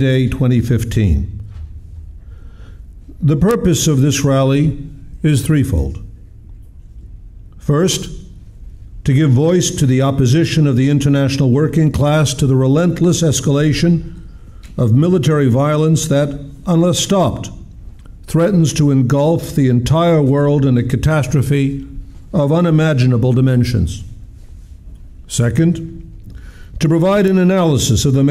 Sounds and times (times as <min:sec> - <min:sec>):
Male speech, man speaking: 0:00.0 - 0:01.4, 0:03.2 - 0:06.1, 0:07.6 - 0:08.2, 0:09.0 - 0:14.1, 0:14.8 - 0:17.6, 0:18.3 - 0:24.1, 0:25.3 - 0:26.0, 0:26.8 - 0:28.3.